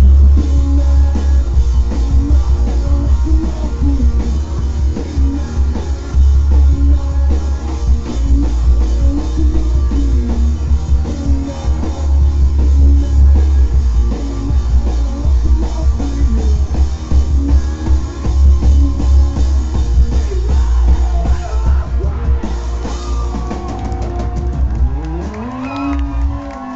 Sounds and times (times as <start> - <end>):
Rock and roll: 0.0 - 26.7.